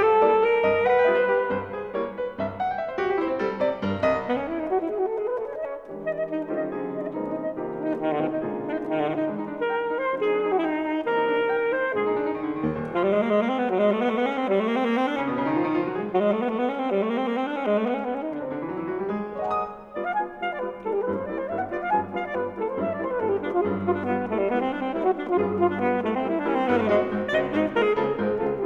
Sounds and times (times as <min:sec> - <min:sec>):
Saxophone: 0:00.0 - 0:03.2, 0:03.8 - 0:19.1, 0:19.7 - 0:28.6.